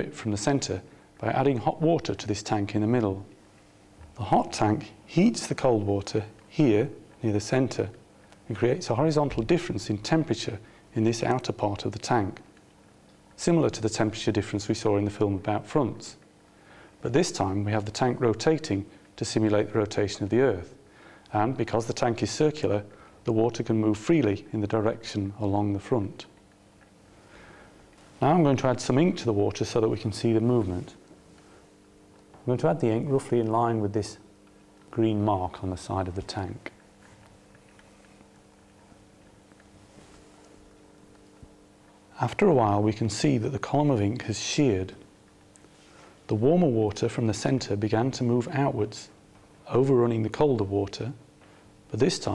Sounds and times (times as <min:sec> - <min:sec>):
Speech: 0:00.0 - 0:03.4, 0:04.2 - 0:12.5, 0:13.4 - 0:16.2, 0:17.0 - 0:26.4, 0:28.2 - 0:31.0, 0:32.4 - 0:34.3, 0:34.9 - 0:36.8, 0:42.2 - 0:45.1, 0:46.3 - 0:51.2, 0:51.9 - 0:52.3.